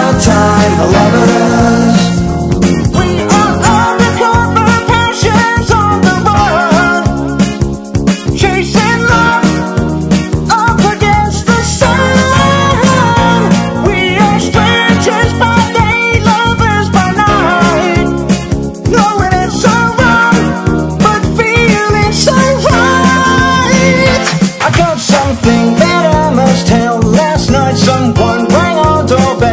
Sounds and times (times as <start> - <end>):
Funny music: 0.0 - 29.5.